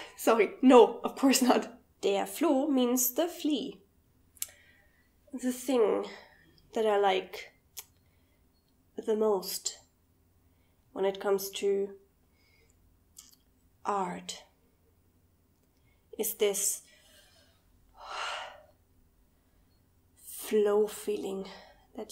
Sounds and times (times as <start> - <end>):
Inside, small room: 0.0 - 22.1
Speech: 0.1 - 3.8, 5.3 - 6.2, 9.0 - 9.8, 11.0 - 12.0, 13.9 - 14.5, 16.2 - 16.8, 20.3 - 22.1.